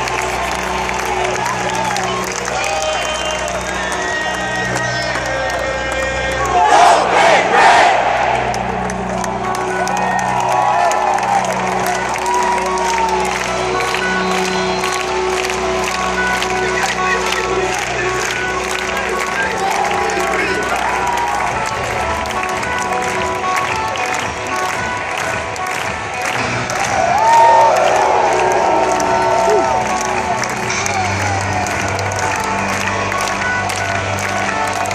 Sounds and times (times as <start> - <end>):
Music: 0.0 - 34.9.